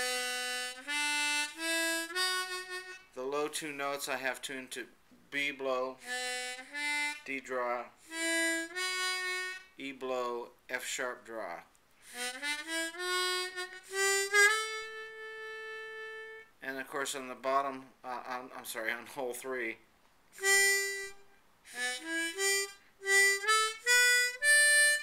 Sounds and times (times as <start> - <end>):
Harmonica: 0.0 - 3.3, 6.0 - 9.9, 12.0 - 16.6, 20.4 - 25.0
Inside, small room: 0.0 - 25.0
Speech: 3.2 - 6.0, 7.2 - 8.0, 9.8 - 11.7, 16.6 - 19.8.